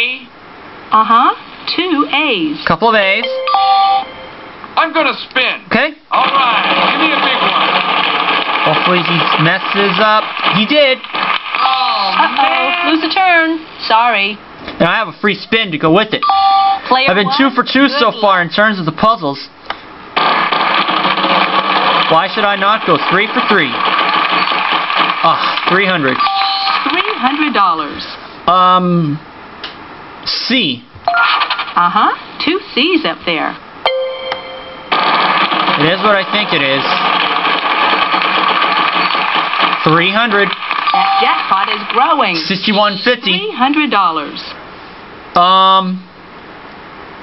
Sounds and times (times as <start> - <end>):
Speech: 4.8 - 7.6, 8.7 - 11.0, 11.7 - 16.3, 16.9 - 19.6, 25.3 - 26.2, 35.8 - 37.0.